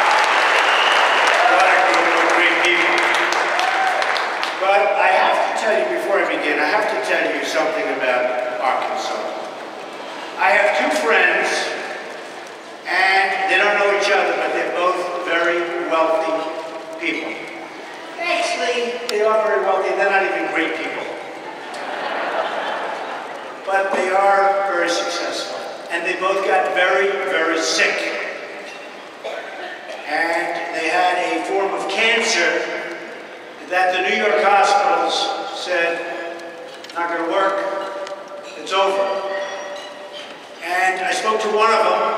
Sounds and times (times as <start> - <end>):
Male speech, man speaking: 1.4 - 3.3, 4.6 - 9.4, 10.4 - 11.9, 12.9 - 17.5, 18.2 - 21.2, 23.7 - 28.4, 30.0 - 32.9, 33.6 - 37.8, 38.6 - 39.4, 40.6 - 42.1
Narration, monologue: 4.4 - 21.4, 23.6 - 42.1.